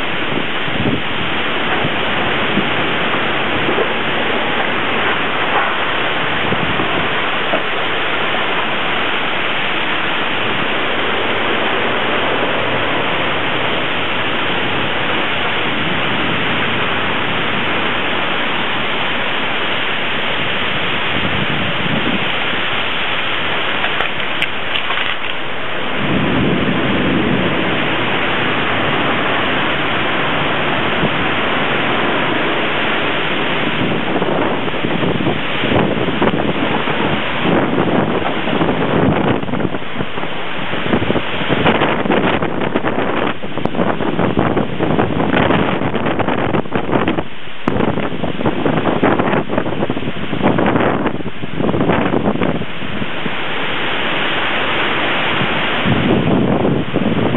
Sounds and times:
Rain: 0:00.0 - 0:57.3.

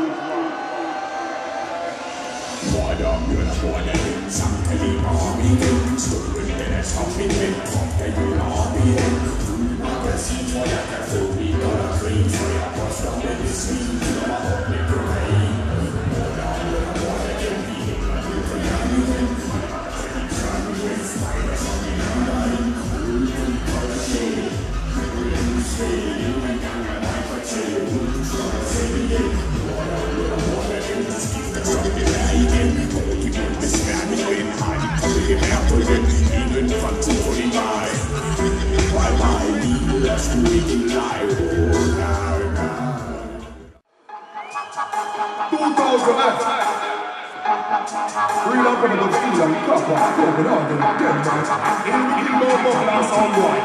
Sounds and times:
Dubstep: 0:01.8 - 0:43.8, 0:44.7 - 0:53.6.

